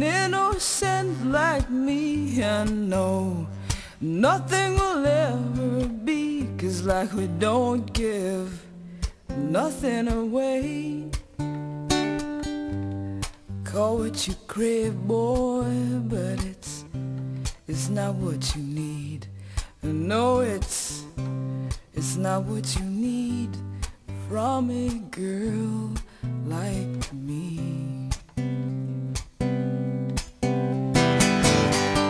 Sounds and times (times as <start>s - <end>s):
Music: 0.0s - 32.1s.